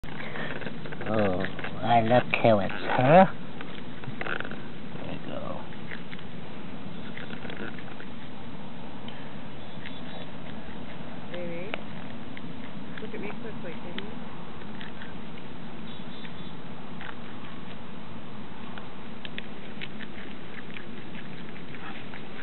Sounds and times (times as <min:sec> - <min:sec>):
Patter: 0:00.0 - 0:22.4.